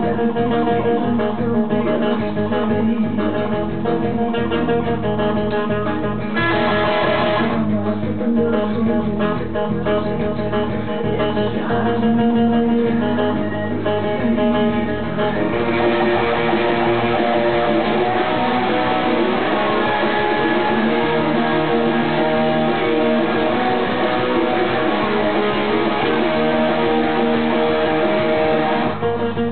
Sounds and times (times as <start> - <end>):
Acoustic guitar: 0.0 - 29.5
Bass guitar: 0.0 - 29.5
Electric guitar: 0.0 - 29.5
Strum: 0.0 - 29.5.